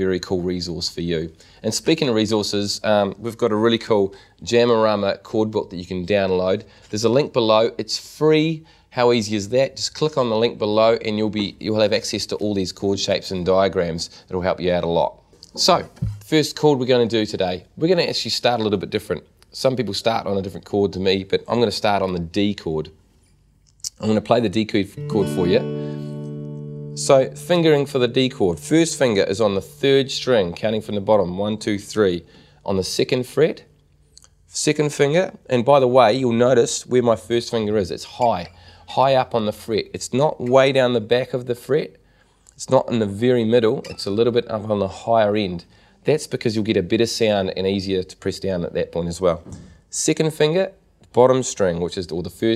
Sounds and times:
Speech: 0:00.0 - 0:23.0, 0:23.8 - 0:25.7, 0:27.0 - 0:42.0, 0:42.6 - 0:52.5.

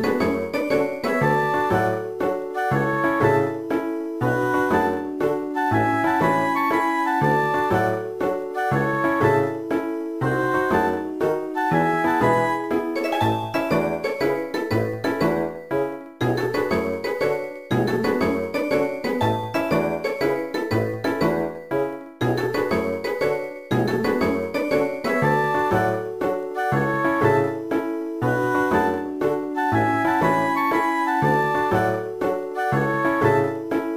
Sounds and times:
Music: 0:00.0 - 0:33.9.

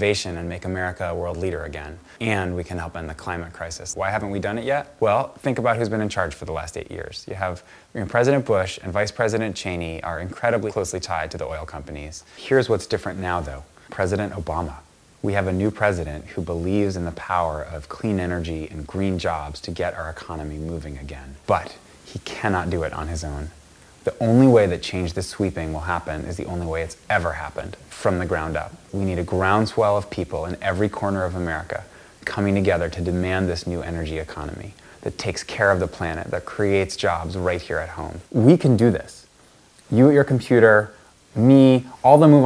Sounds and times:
Male speech, man speaking: 0:00.0 - 0:39.3, 0:39.9 - 0:42.4
Narration, monologue: 0:00.0 - 0:42.4.

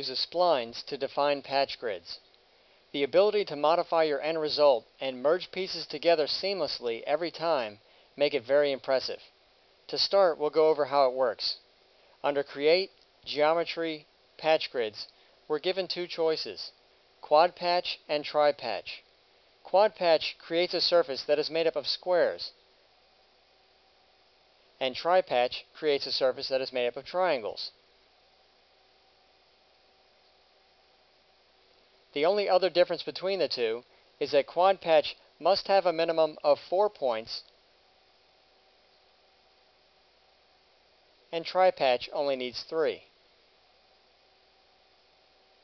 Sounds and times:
Speech: 0:00.0 - 0:02.3, 0:03.0 - 0:09.3, 0:09.9 - 0:11.6, 0:12.2 - 0:19.1, 0:19.7 - 0:22.6, 0:24.8 - 0:27.8, 0:32.2 - 0:37.5, 0:41.3 - 0:43.1.

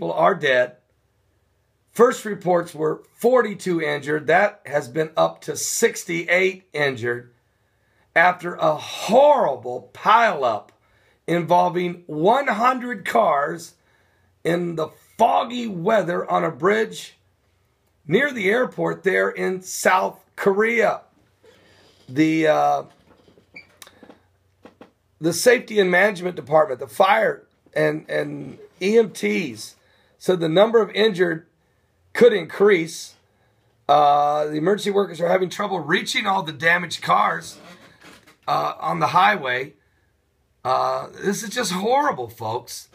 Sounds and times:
Speech: 0:00.0 - 0:00.8, 0:01.9 - 0:07.3, 0:08.2 - 0:10.7, 0:11.3 - 0:13.8, 0:14.4 - 0:17.2, 0:18.0 - 0:21.1, 0:22.1 - 0:23.0, 0:25.2 - 0:31.5, 0:32.2 - 0:33.2, 0:33.9 - 0:37.8, 0:38.4 - 0:39.8, 0:40.6 - 0:42.9.

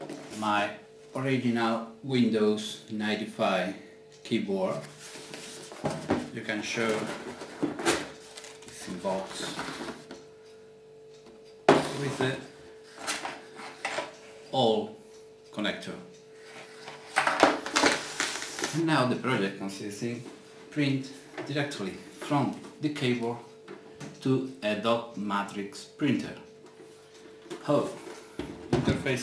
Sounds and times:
Speech: 0:00.4 - 0:04.9, 0:06.3 - 0:07.2, 0:08.7 - 0:09.7, 0:11.9 - 0:12.5, 0:14.5 - 0:16.1, 0:18.7 - 0:23.5, 0:24.2 - 0:26.5, 0:27.6 - 0:28.0, 0:28.8 - 0:29.2.

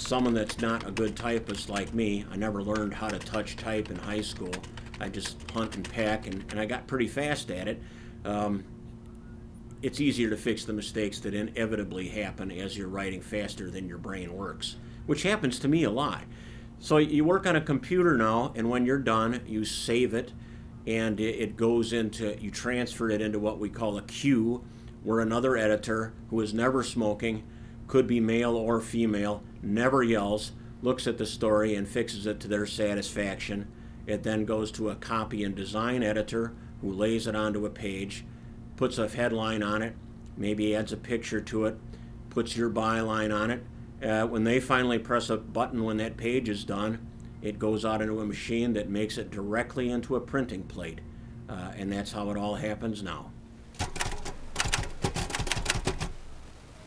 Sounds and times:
Typewriter: 0:00.0 - 0:06.7, 0:53.8 - 0:56.2
Speech: 0:00.0 - 0:08.7, 0:09.8 - 0:53.4.

